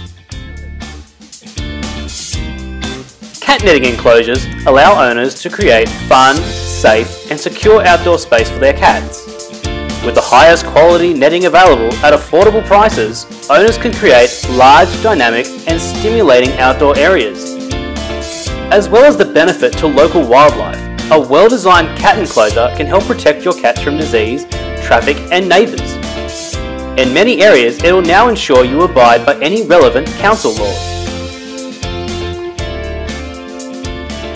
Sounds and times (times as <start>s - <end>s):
Music: 0.0s - 34.3s
Speech: 3.4s - 9.2s, 10.0s - 17.5s, 18.7s - 26.0s, 27.0s - 30.8s.